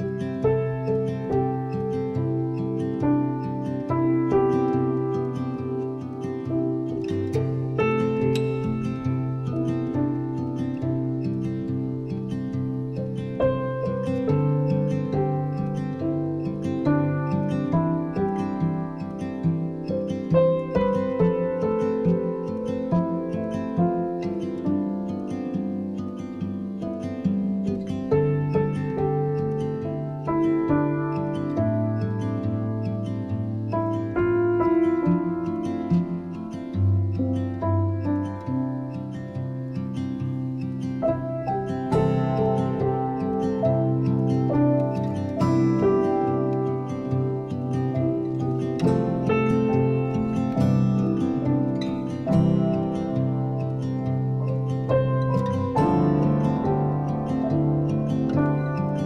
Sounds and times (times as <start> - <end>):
Music: 0.0 - 59.0.